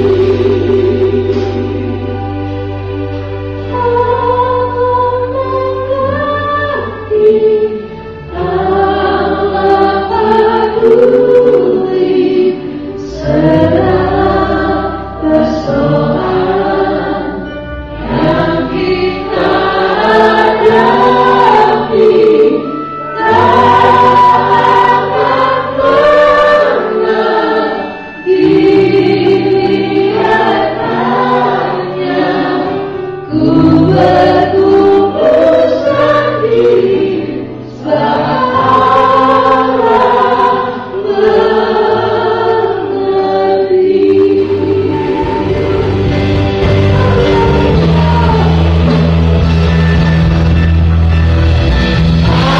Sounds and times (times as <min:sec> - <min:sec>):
Choir: 0:00.0 - 0:02.4, 0:03.6 - 0:52.5
Gospel music: 0:00.0 - 0:52.5
Vocal music: 0:00.0 - 0:52.5.